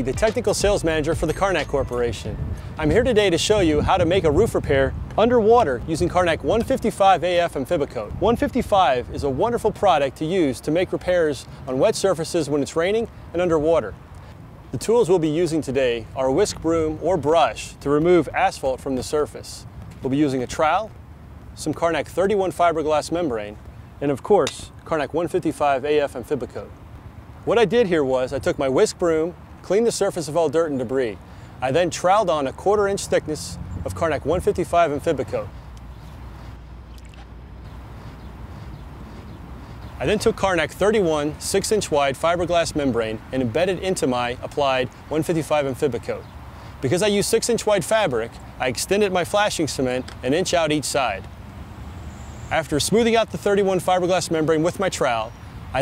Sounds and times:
Speech: 0.0 - 14.0, 14.7 - 21.0, 21.6 - 26.8, 27.5 - 35.5, 40.0 - 51.3, 52.5 - 55.8.

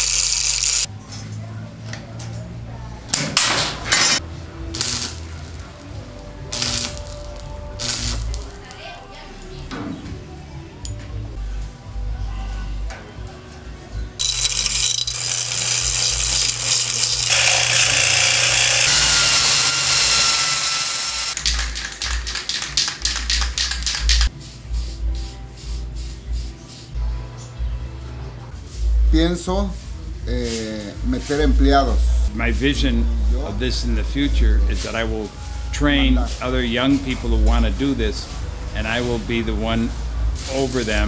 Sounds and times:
Music: 0.8 - 41.0.

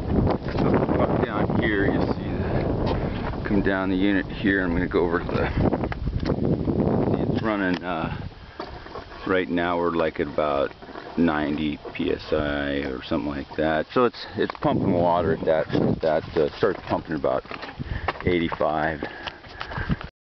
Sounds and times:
Speech: 0.6 - 2.6, 3.4 - 5.6, 7.1 - 8.2, 9.2 - 17.5, 18.2 - 19.1.

